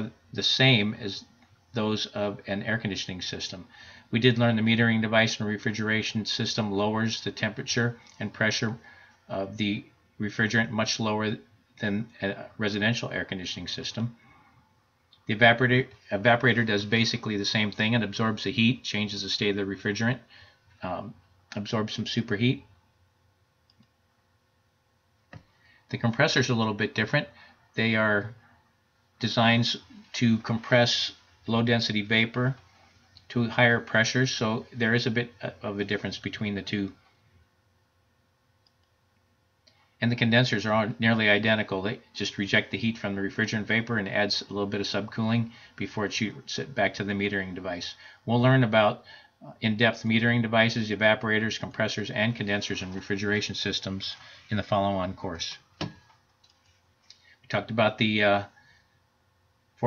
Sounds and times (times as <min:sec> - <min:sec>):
Speech: 0:00.0 - 0:14.4, 0:15.2 - 0:22.8, 0:25.9 - 0:28.5, 0:29.2 - 0:37.0, 0:40.0 - 0:55.7, 0:57.5 - 0:58.6
Clicking: 0:23.7 - 0:24.0, 0:38.6 - 0:39.8.